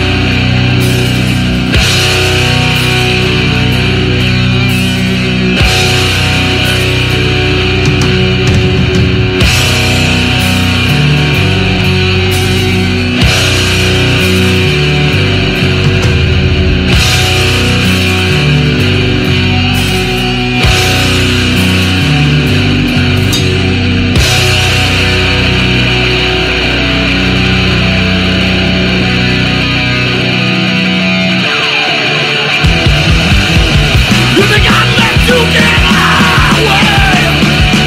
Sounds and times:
Independent music: 0:00.0 - 0:37.8
Theme music: 0:00.0 - 0:37.8.

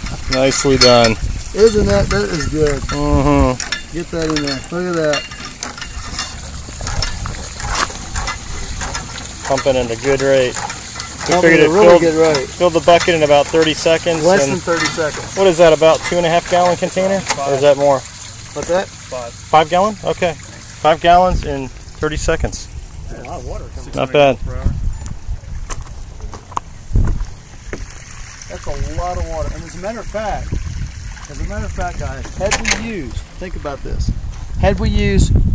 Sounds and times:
Stream: 0:00.0 - 0:35.2
Speech: 0:09.4 - 0:10.6, 0:11.2 - 0:18.0, 0:28.5 - 0:30.5, 0:31.3 - 0:35.4.

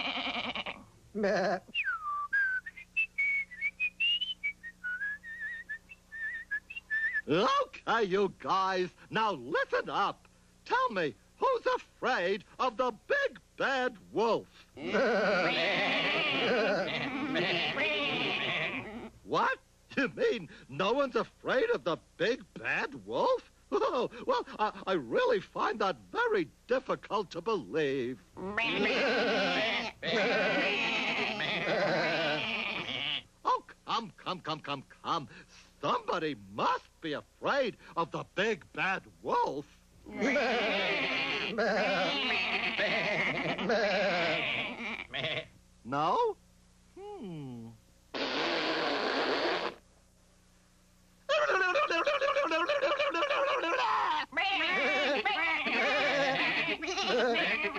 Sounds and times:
Sheep: 0:00.0 - 0:00.9, 0:14.8 - 0:19.1, 0:28.5 - 0:33.2, 0:40.1 - 0:45.5, 0:54.4 - 0:57.7
Speech: 0:01.1 - 0:01.8, 0:07.2 - 0:15.2, 0:19.3 - 0:32.0, 0:33.4 - 0:42.8, 0:45.8 - 0:46.4, 0:47.0 - 0:47.8.

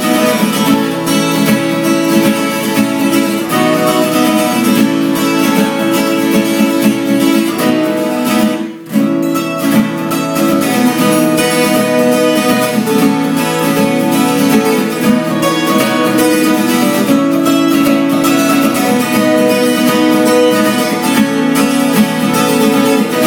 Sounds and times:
Acoustic guitar: 0:00.0 - 0:23.2
Strum: 0:00.0 - 0:23.2.

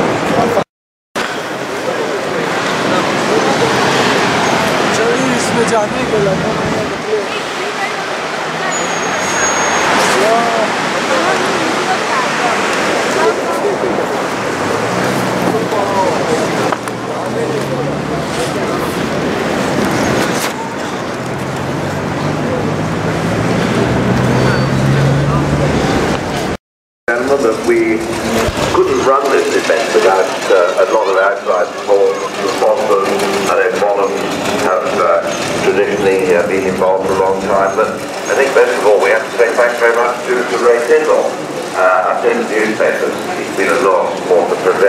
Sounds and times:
Car passing by: 0:01.2 - 0:26.6
Speech: 0:04.8 - 0:09.0, 0:10.0 - 0:14.2, 0:15.5 - 0:19.0, 0:27.1 - 0:44.8.

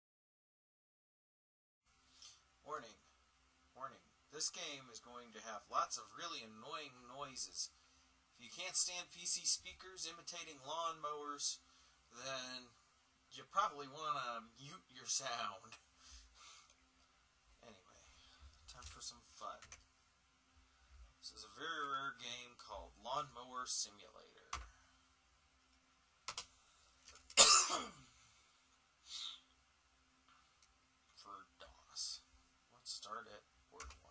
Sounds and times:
Speech: 0:02.6 - 0:03.0, 0:03.7 - 0:07.8, 0:08.4 - 0:15.8, 0:17.6 - 0:18.1, 0:18.7 - 0:19.8, 0:21.2 - 0:24.6, 0:31.2 - 0:34.1.

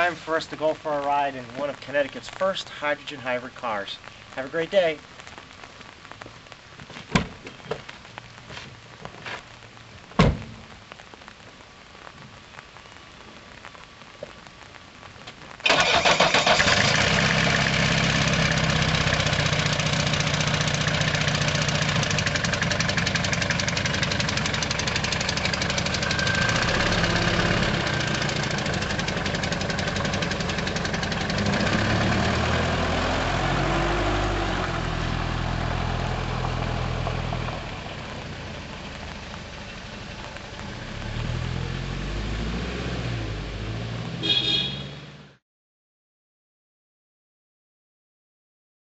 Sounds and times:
Outside, rural or natural: 0:00.0 - 0:45.4
Car: 0:15.6 - 0:45.4.

